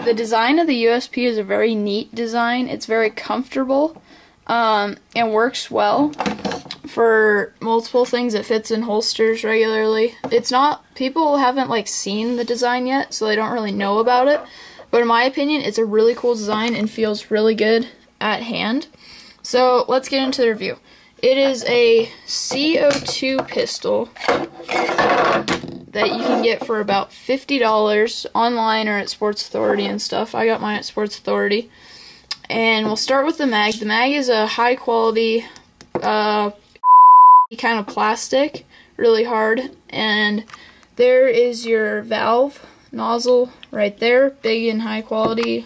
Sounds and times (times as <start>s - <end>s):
Speech: 0.0s - 6.2s, 6.9s - 24.1s, 26.0s - 31.7s, 32.4s - 36.6s, 37.5s - 45.6s
Inside, small room: 0.0s - 45.6s.